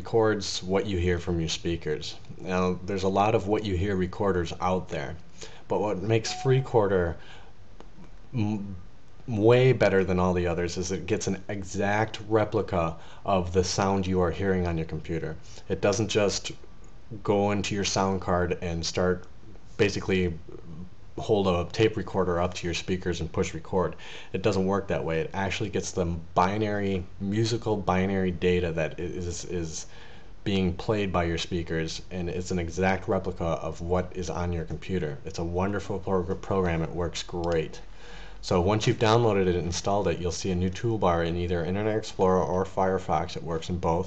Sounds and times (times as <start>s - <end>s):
Speech: 0.0s - 7.2s, 8.3s - 44.0s.